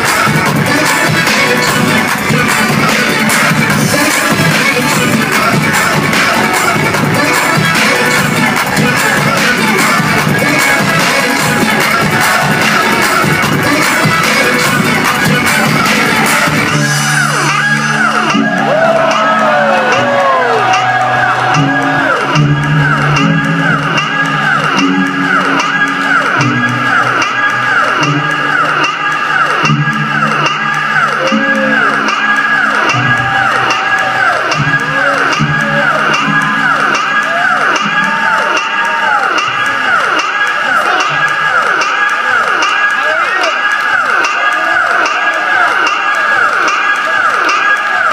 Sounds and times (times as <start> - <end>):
Disco: 0.0 - 48.1
Soundtrack music: 0.0 - 48.1.